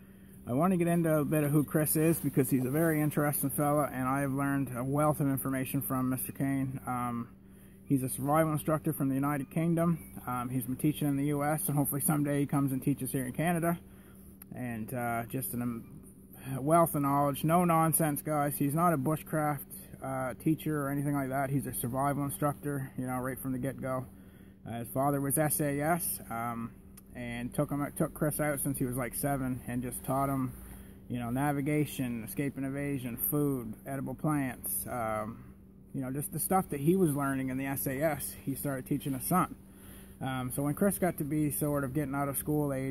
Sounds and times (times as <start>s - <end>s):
Speech: 0.5s - 13.8s, 14.5s - 39.6s, 40.2s - 42.9s.